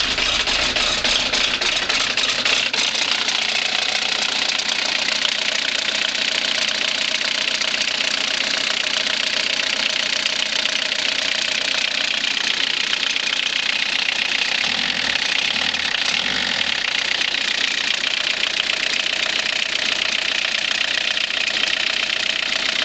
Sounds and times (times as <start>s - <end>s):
Car: 0.0s - 22.8s
Engine: 0.0s - 22.8s
Outside, urban or manmade: 0.0s - 22.8s.